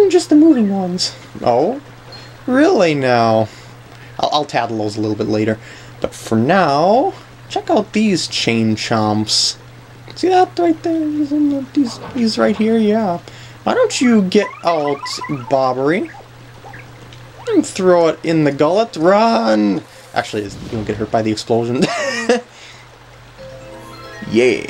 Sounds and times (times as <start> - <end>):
Speech: 0.0 - 1.8, 2.5 - 3.5, 4.2 - 16.2, 17.4 - 22.5, 24.3 - 24.6.